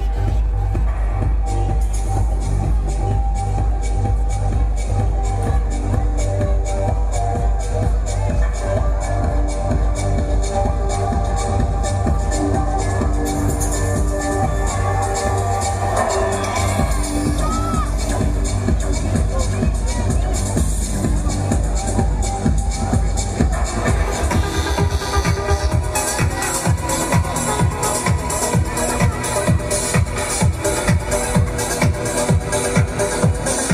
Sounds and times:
Electronic music: 0.0 - 33.7.

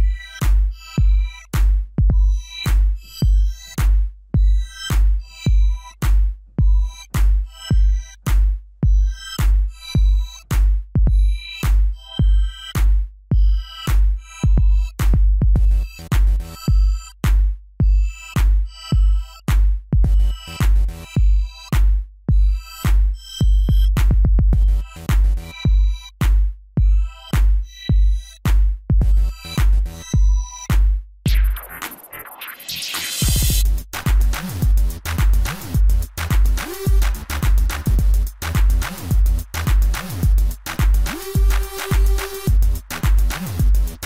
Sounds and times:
Music: 0.0 - 44.0.

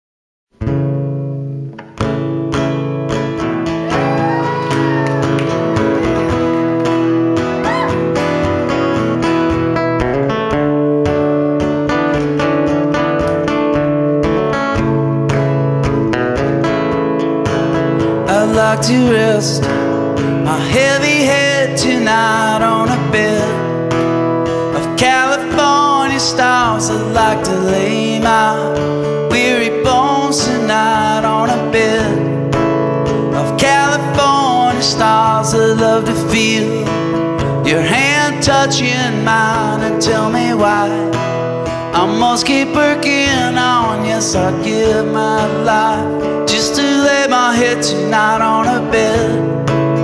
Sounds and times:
Music: 0.5 - 50.0.

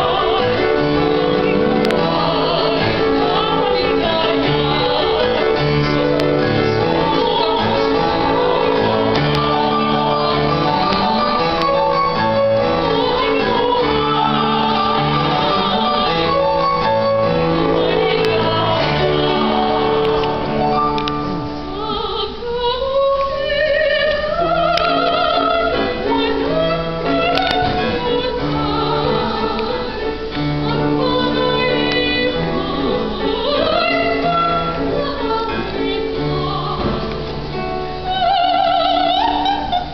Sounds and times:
Female singing: 0.0 - 12.0, 12.8 - 16.6, 17.6 - 20.2, 21.7 - 37.2, 38.0 - 39.9
Choir: 0.0 - 39.9.

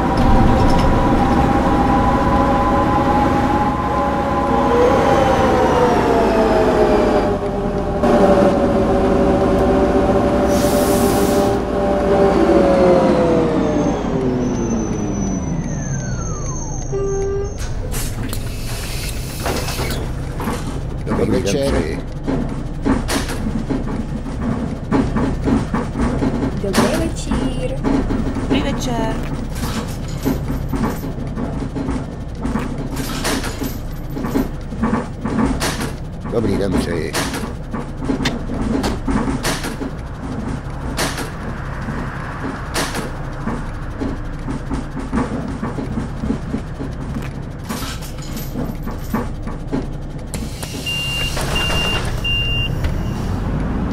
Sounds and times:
Vehicle: 0.0 - 53.9.

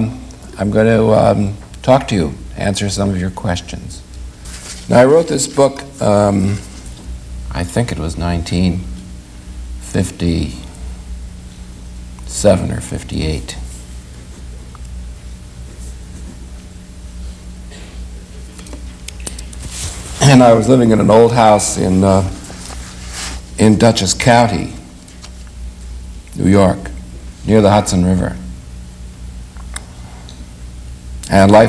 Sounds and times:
Speech: 0.0 - 4.0, 4.9 - 6.7, 7.5 - 8.9, 9.8 - 10.7, 12.3 - 13.7, 20.2 - 22.4, 23.6 - 24.9, 26.3 - 28.5, 31.2 - 31.6.

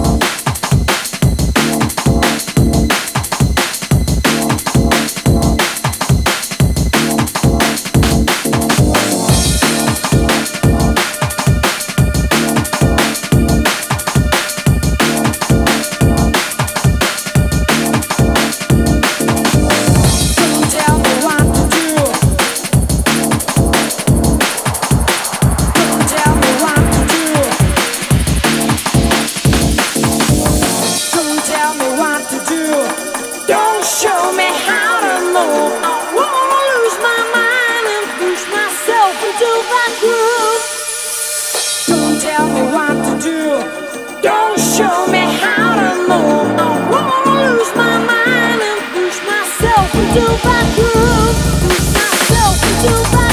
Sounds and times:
Bass drum: 0.0 - 31.0, 49.6 - 53.3
Drum kit: 0.0 - 43.1, 44.6 - 53.3.

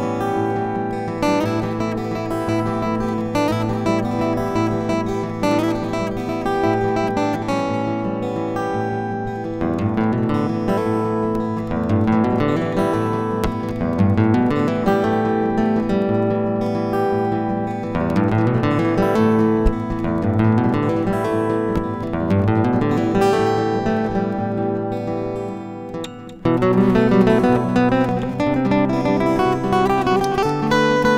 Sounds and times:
Acoustic guitar: 0.0 - 31.1
Electric guitar: 0.0 - 31.1
Strum: 0.0 - 31.1.

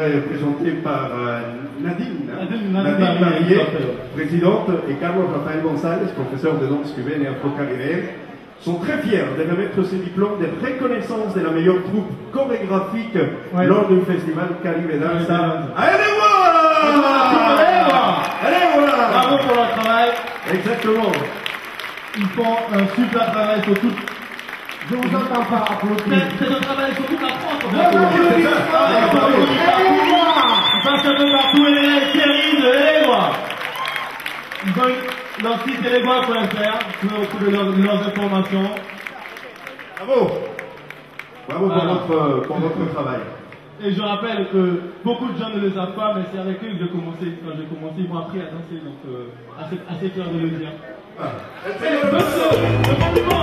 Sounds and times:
Speech: 0.0 - 21.4, 22.2 - 24.1, 24.9 - 33.4.

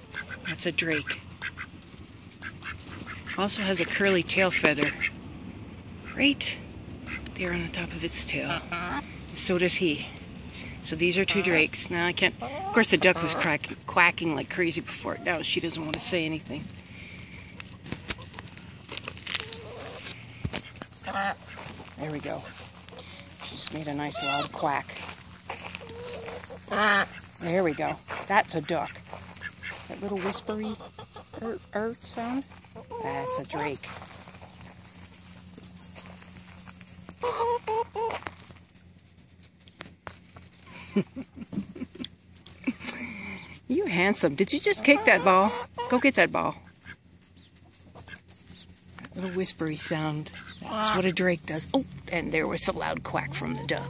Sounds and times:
Speech: 0.5 - 1.2, 3.4 - 5.0, 6.1 - 6.6, 7.4 - 10.2, 10.8 - 16.7, 22.0 - 22.5, 23.4 - 25.0, 27.4 - 29.0, 29.9 - 30.8, 31.4 - 33.9, 43.7 - 46.6, 49.1 - 53.8.

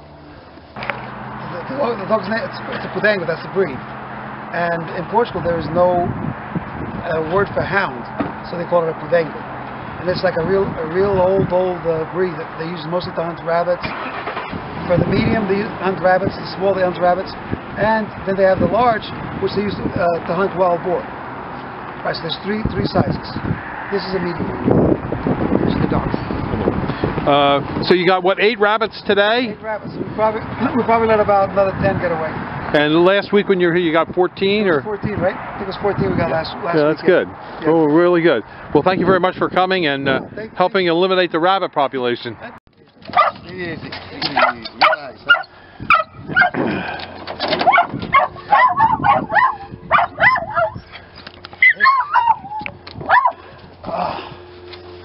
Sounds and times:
Speech: 1.5 - 3.8, 4.5 - 6.1, 7.0 - 9.4, 10.0 - 13.9, 14.9 - 21.0, 27.3 - 42.6, 43.3 - 45.3.

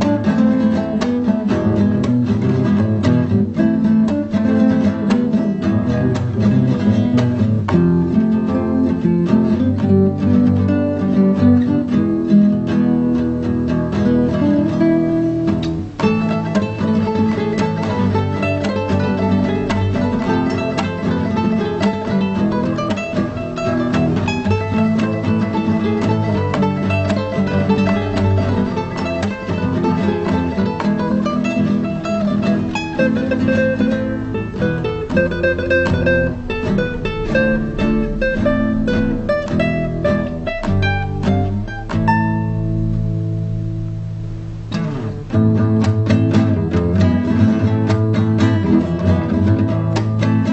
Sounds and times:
Acoustic guitar: 0.0 - 50.5
Strum: 0.0 - 50.5.

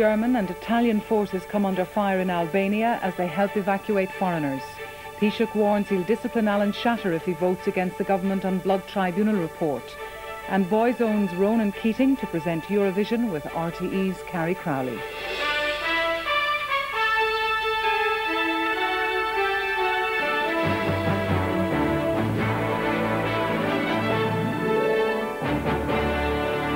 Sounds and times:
Speech: 0.0 - 15.0
Music: 0.0 - 26.7.

